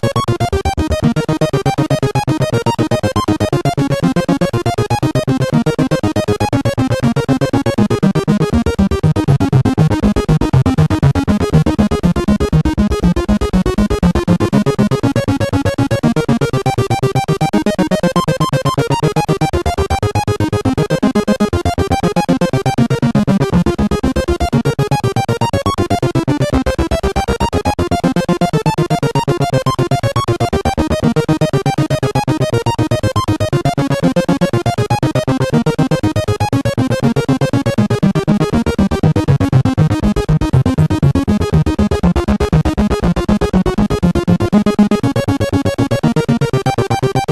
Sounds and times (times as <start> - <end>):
Music: 0.0 - 47.3.